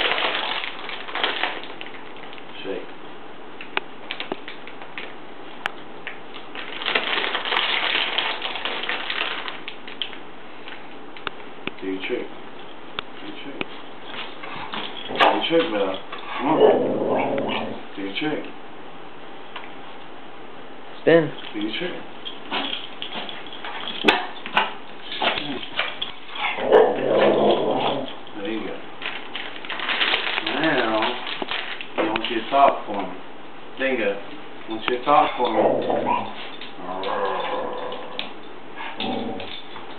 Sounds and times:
Speech: 2.5s - 2.9s, 11.8s - 12.3s, 13.2s - 13.7s, 15.2s - 16.0s, 18.0s - 18.6s, 21.0s - 22.1s, 28.4s - 28.9s, 30.4s - 31.2s, 32.0s - 33.2s, 33.8s - 35.8s.

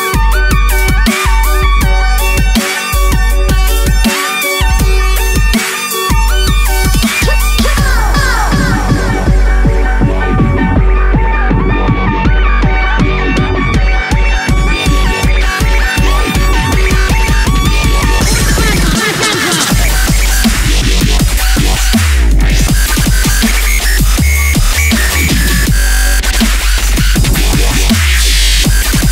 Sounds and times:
Music: 0.0s - 29.1s.

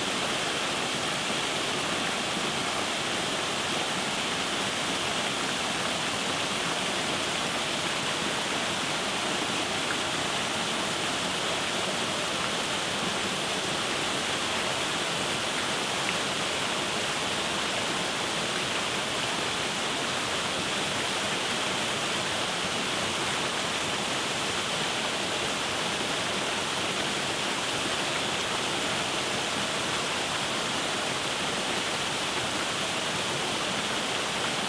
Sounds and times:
Stream: 0.0s - 34.6s
Waterfall: 0.0s - 34.6s.

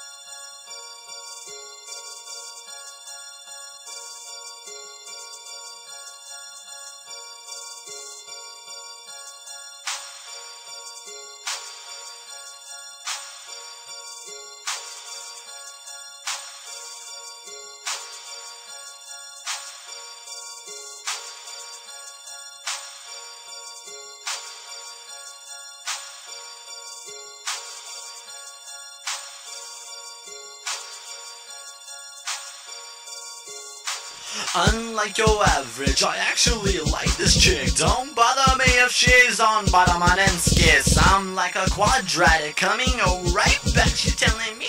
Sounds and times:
Music: 0.0s - 44.6s.

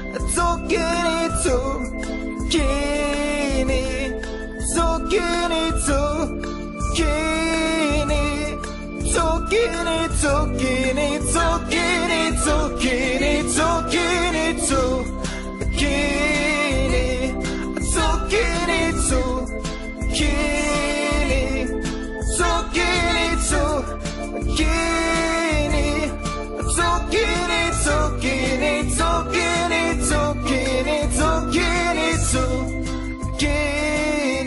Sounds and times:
Music: 0.0s - 34.4s.

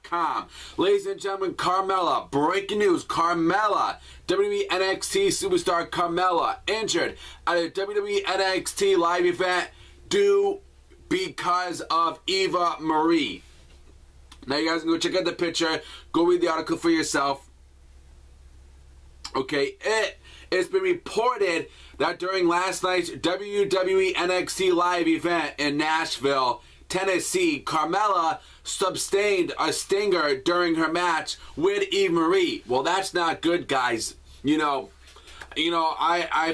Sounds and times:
Speech: 0.0s - 13.4s, 14.4s - 17.5s, 19.3s - 34.9s, 35.5s - 36.5s.

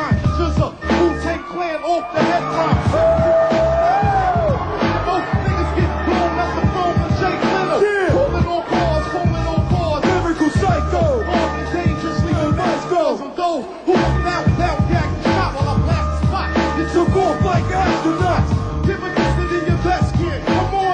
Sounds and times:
Music: 0.0s - 20.9s.

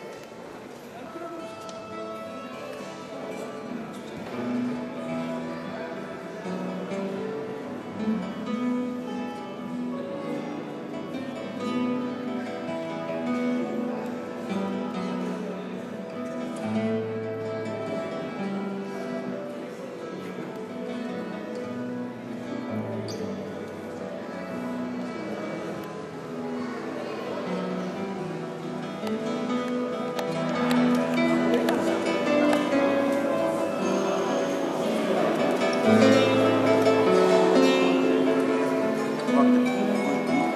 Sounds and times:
Acoustic guitar: 0.0s - 40.5s
Speech: 0.0s - 40.5s.

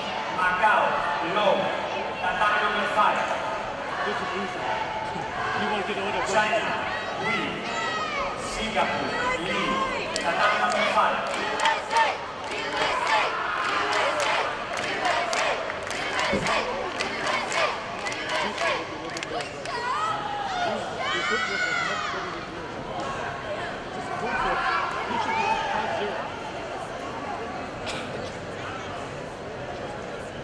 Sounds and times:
Inside, large room or hall: 0.0s - 30.4s
Inside, public space: 0.0s - 30.4s
Male speech, man speaking: 0.3s - 3.4s, 4.0s - 4.8s, 5.5s - 7.7s, 8.4s - 11.6s, 20.5s - 26.3s.

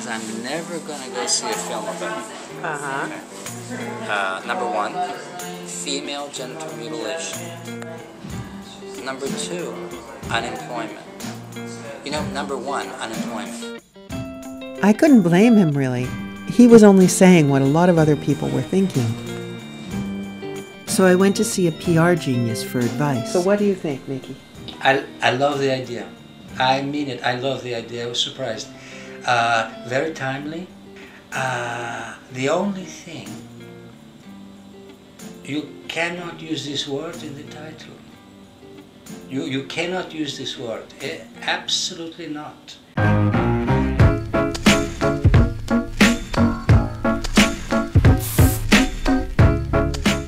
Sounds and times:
Music: 0.0s - 50.2s
Speech: 14.8s - 19.2s, 20.9s - 28.4s, 39.4s - 42.8s.

